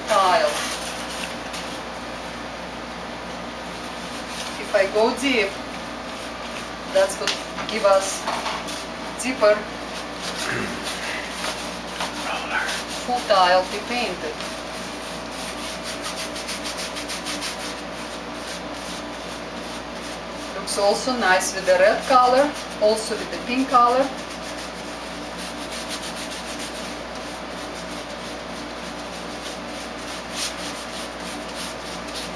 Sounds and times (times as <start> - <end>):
Inside, small room: 0.0 - 32.3
Speech: 0.1 - 0.6, 4.6 - 5.6, 6.9 - 8.2, 9.2 - 9.7, 12.2 - 14.4, 20.6 - 24.1.